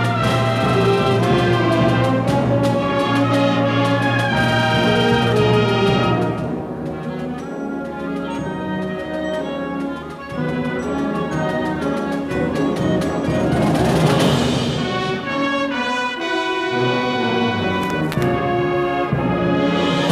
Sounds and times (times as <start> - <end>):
Orchestra: 0.0 - 20.1.